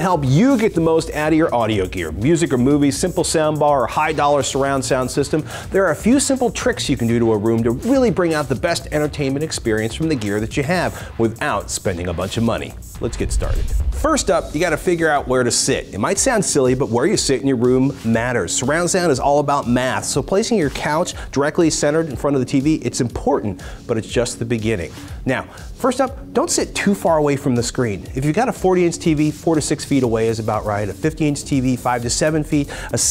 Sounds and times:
Music: 0:00.0 - 0:33.1
Speech: 0:00.0 - 0:33.1.

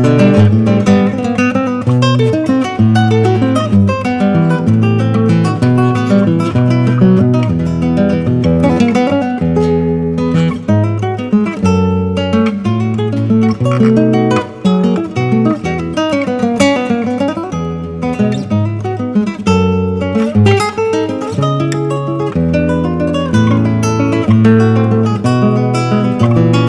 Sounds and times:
Flamenco: 0:00.0 - 0:26.6
Guitar: 0:00.0 - 0:26.6.

